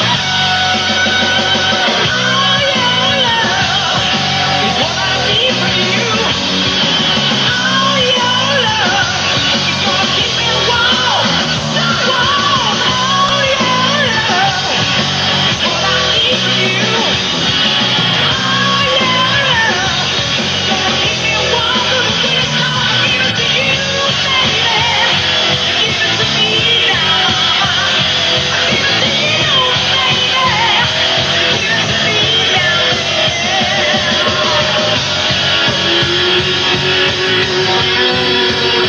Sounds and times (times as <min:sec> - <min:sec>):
Music: 0:00.0 - 0:38.8
Singing: 0:00.0 - 0:38.8.